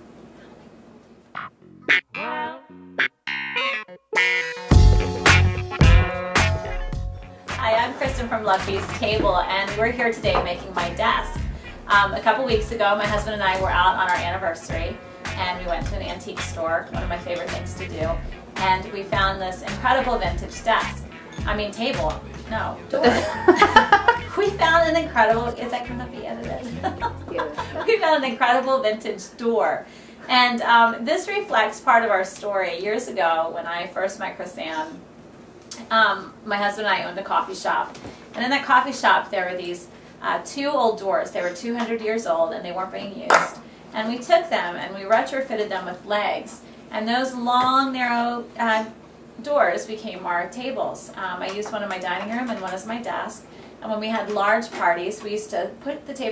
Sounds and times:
Speech: 2.2 - 2.6, 7.5 - 23.3, 24.4 - 35.0, 35.8 - 56.3.

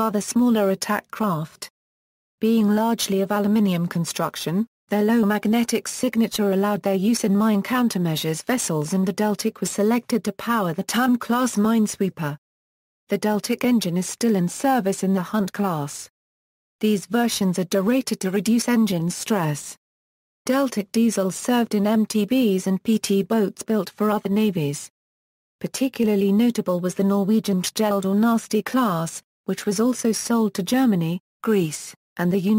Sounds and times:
Speech: 0.0 - 1.7, 2.4 - 12.4, 13.1 - 16.1, 16.8 - 19.8, 20.5 - 24.9, 25.6 - 32.5.

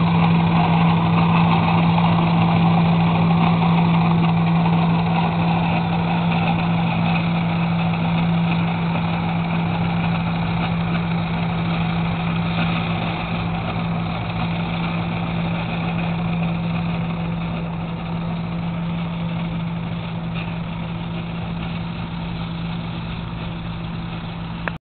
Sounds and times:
Idling: 0.0 - 24.8
Medium engine (mid frequency): 0.0 - 24.8
Vehicle: 0.0 - 24.8.

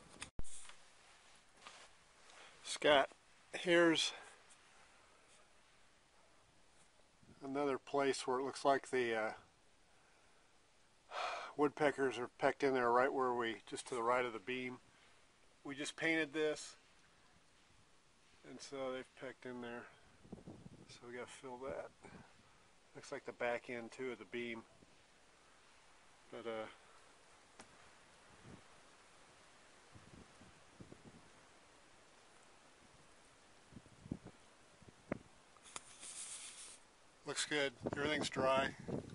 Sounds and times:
Speech: 2.6 - 4.3, 7.4 - 9.5, 11.5 - 14.8, 15.6 - 16.8, 18.4 - 20.0, 20.9 - 22.0, 22.9 - 24.7, 26.3 - 26.8, 37.2 - 38.8.

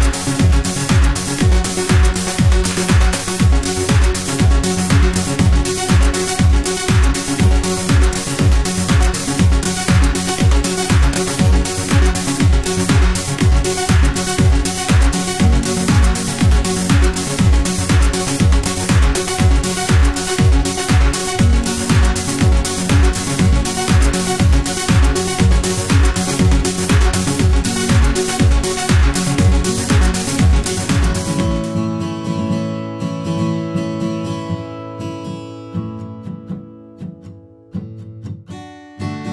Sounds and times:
Disco: 0.0 - 32.4.

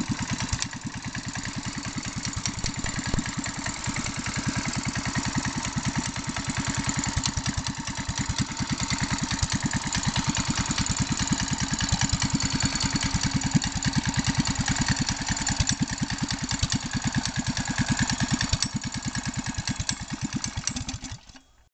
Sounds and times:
Vehicle: 0.0 - 21.7.

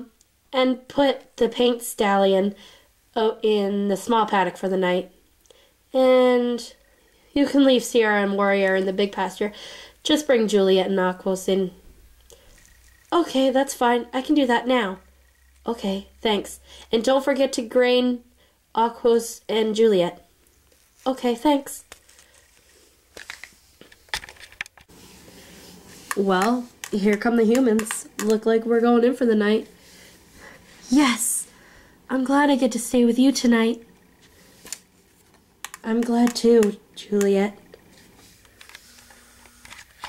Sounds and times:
Speech: 0.0 - 2.6, 3.2 - 5.1, 5.9 - 6.8, 7.4 - 11.8, 13.2 - 15.0, 15.7 - 18.2, 18.8 - 20.3, 21.0 - 21.9, 26.2 - 29.7, 30.8 - 31.5, 32.1 - 33.9, 35.8 - 37.6.

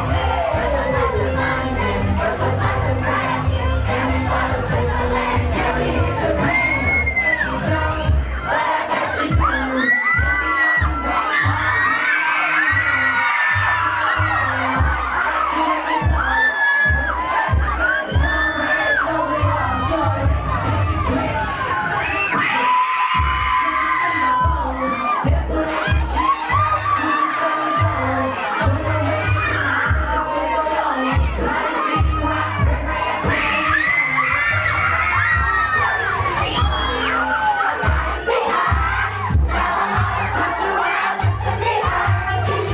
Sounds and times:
Music: 0.0 - 42.7.

